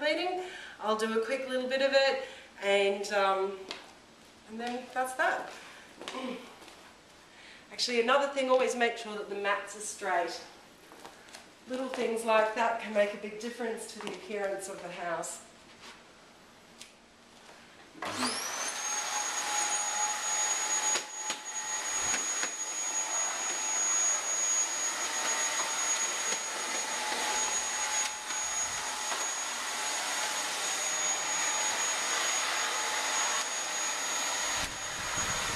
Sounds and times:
Vacuum cleaner: 0:18.0 - 0:35.5.

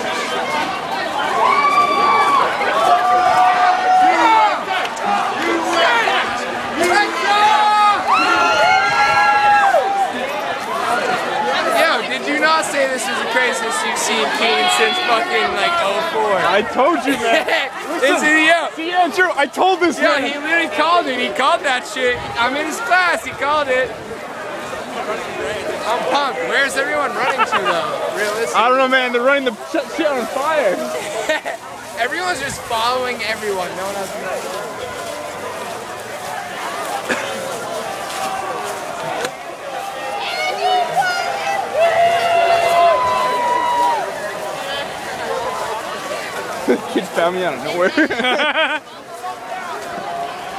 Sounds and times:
Crowd: 0:00.0 - 0:50.5.

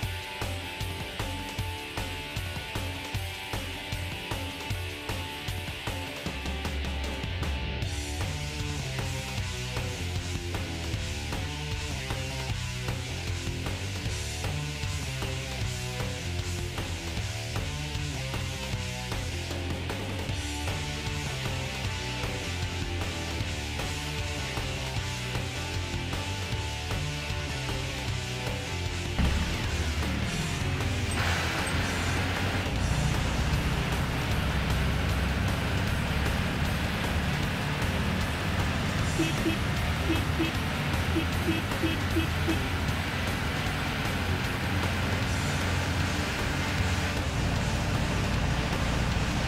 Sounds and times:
Music: 0:00.0 - 0:49.4.

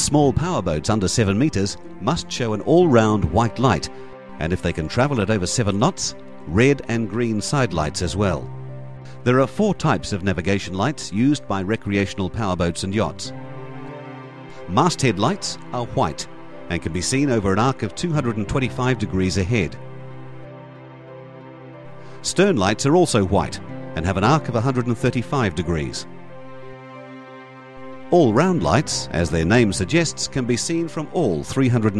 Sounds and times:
Speech: 0:00.0 - 0:08.5, 0:09.3 - 0:13.3, 0:14.7 - 0:19.8, 0:22.2 - 0:26.1, 0:28.1 - 0:32.0
Music: 0:00.0 - 0:32.0.

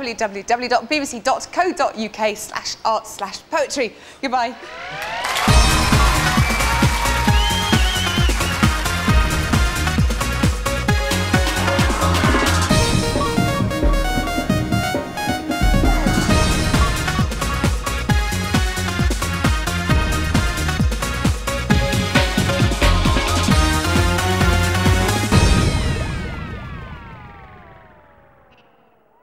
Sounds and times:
Exciting music: 0:05.3 - 0:26.8.

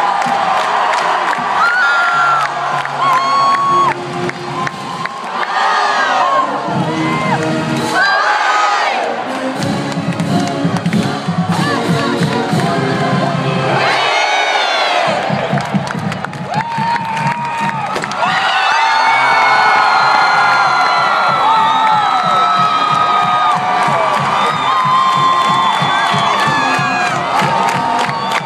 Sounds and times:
Cheering: 0:00.0 - 0:10.5, 0:13.5 - 0:28.4
Crowd: 0:00.0 - 0:28.4
Music: 0:00.1 - 0:28.4.

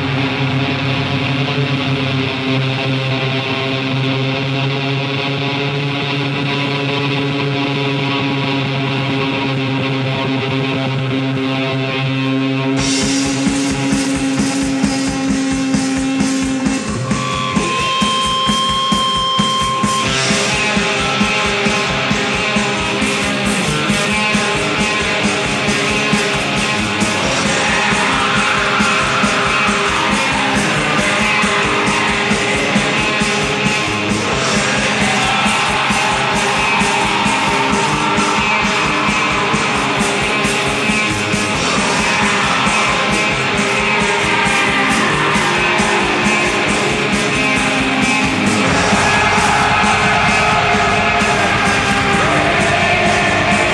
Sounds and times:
Heavy metal: 0:00.0 - 0:53.7.

